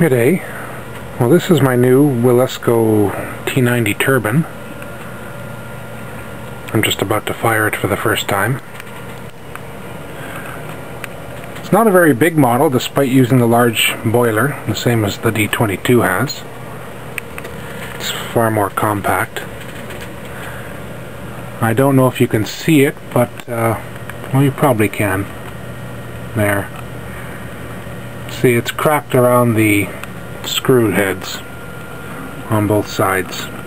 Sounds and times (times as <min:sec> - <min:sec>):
Speech: 0:00.0 - 0:00.6, 0:01.2 - 0:04.6, 0:06.7 - 0:08.6, 0:11.6 - 0:16.5, 0:18.0 - 0:19.5, 0:21.6 - 0:25.3, 0:26.3 - 0:26.8, 0:28.3 - 0:31.5, 0:32.5 - 0:33.6.